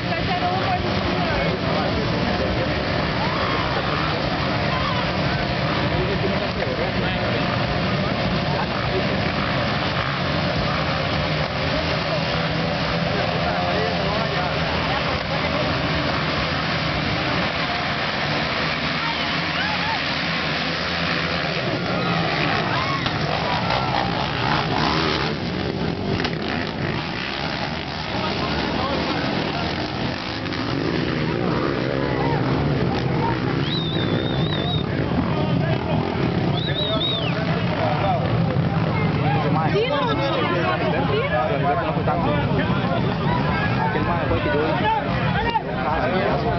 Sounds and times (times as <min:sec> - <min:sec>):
Speech: 0:00.0 - 0:20.2, 0:21.1 - 0:46.5.